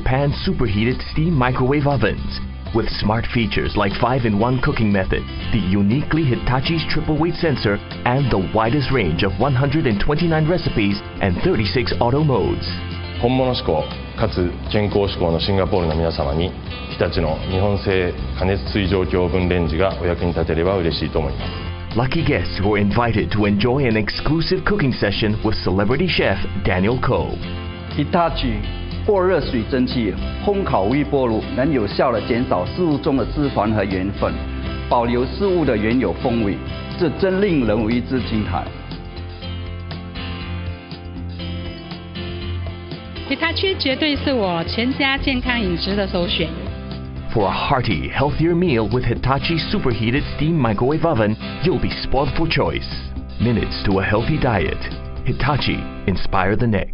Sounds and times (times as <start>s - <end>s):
Speech: 0.0s - 27.4s, 28.0s - 38.8s, 43.3s - 46.6s, 47.3s - 56.9s
Music: 0.0s - 56.9s.